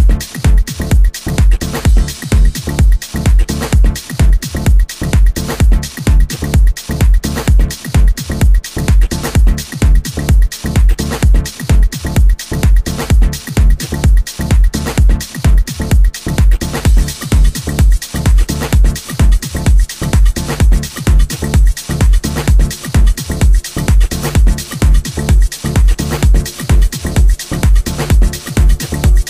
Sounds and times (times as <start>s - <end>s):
Funny music: 0.0s - 29.2s.